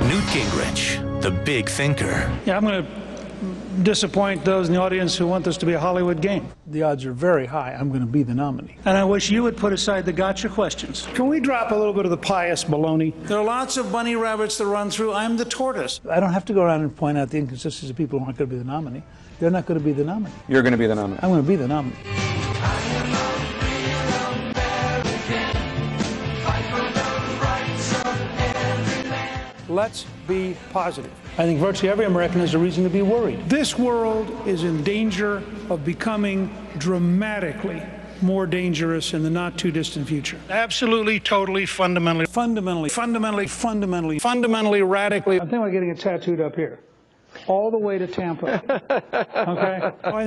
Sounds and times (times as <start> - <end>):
Music: 0.0 - 3.1, 18.3 - 44.0.